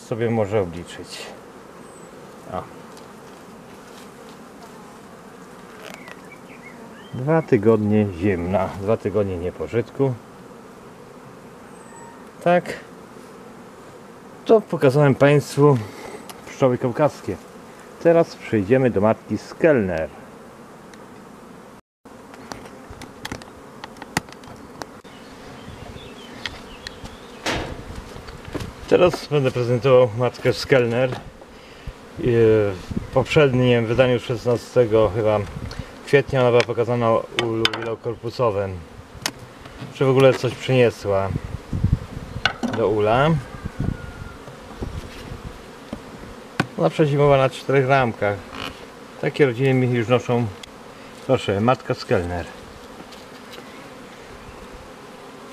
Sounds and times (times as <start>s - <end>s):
Bee, wasp, etc.: 0.0s - 55.5s
Fly, housefly: 0.0s - 55.5s.